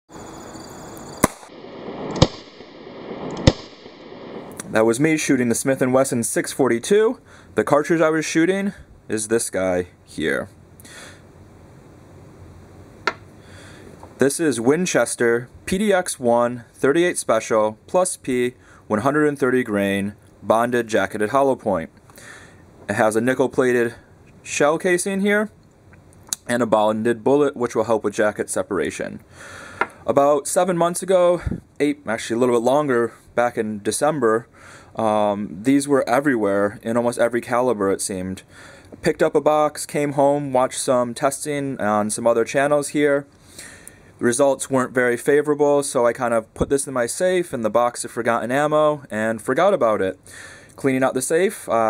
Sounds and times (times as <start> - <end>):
Outside, rural or natural: 0.0 - 51.8
Speech: 4.6 - 10.6, 14.2 - 21.9, 22.9 - 25.6, 26.4 - 29.2, 30.0 - 38.4, 39.0 - 43.3, 44.2 - 50.2, 50.8 - 51.8.